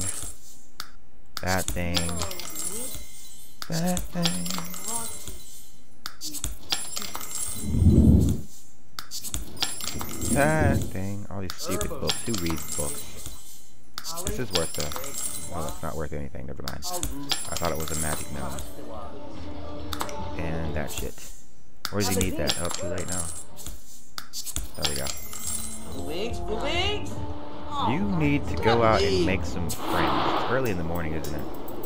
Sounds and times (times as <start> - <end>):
Speech: 1.4 - 2.4, 3.7 - 5.0, 10.2 - 13.0, 14.1 - 19.0, 20.2 - 21.2, 21.9 - 23.3, 24.8 - 25.1, 27.8 - 31.4.